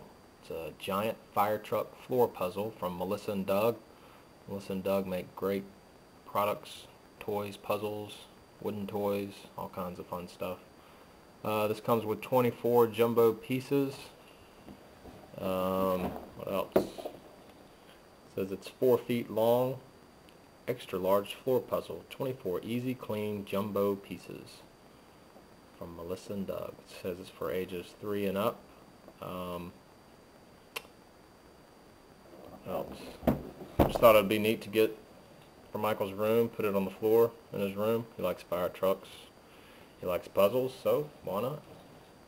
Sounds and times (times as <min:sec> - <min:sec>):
Speech: 0:00.4 - 0:03.8, 0:04.5 - 0:10.6, 0:11.4 - 0:14.2, 0:15.4 - 0:17.1, 0:18.3 - 0:19.9, 0:20.6 - 0:24.7, 0:25.8 - 0:28.6, 0:29.2 - 0:29.8, 0:32.5 - 0:33.2, 0:33.8 - 0:35.0, 0:35.7 - 0:39.3, 0:40.0 - 0:41.7.